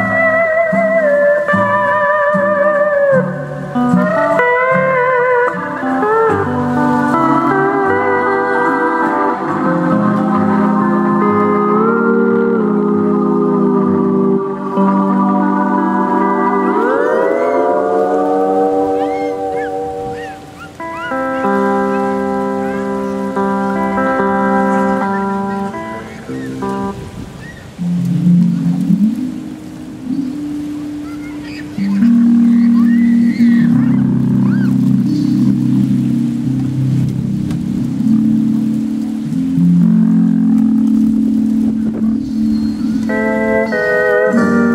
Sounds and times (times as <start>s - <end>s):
Ocean: 0.0s - 44.7s
Steel guitar, slide guitar: 0.0s - 44.7s.